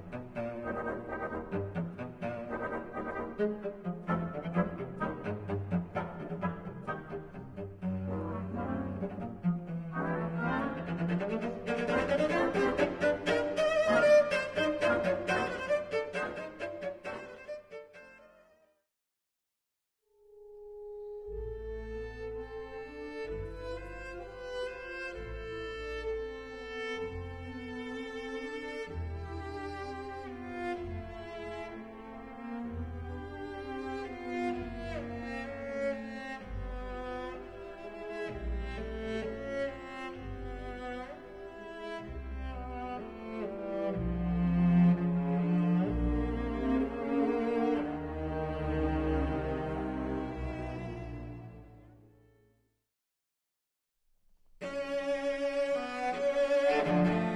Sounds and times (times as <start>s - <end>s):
Cello: 0.0s - 18.5s, 20.4s - 52.4s, 54.6s - 57.3s.